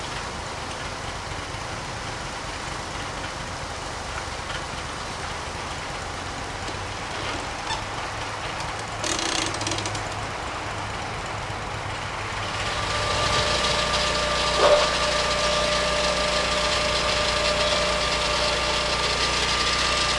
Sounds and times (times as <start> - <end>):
Chainsaw: 12.3 - 20.1
Wood: 12.9 - 19.8.